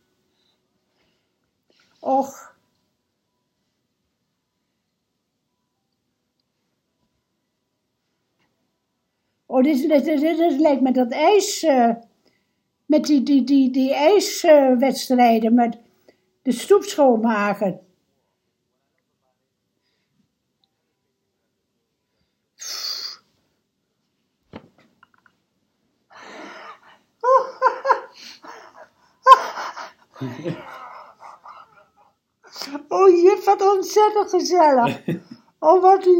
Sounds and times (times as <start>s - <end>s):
Inside, small room: 0.0s - 36.1s.